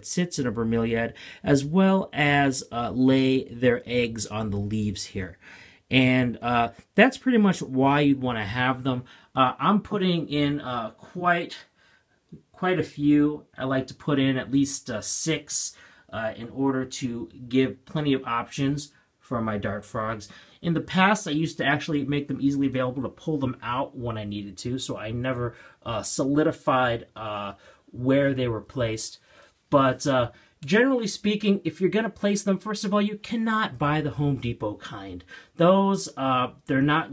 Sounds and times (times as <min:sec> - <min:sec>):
Speech: 0:00.0 - 0:11.7, 0:12.3 - 0:37.1.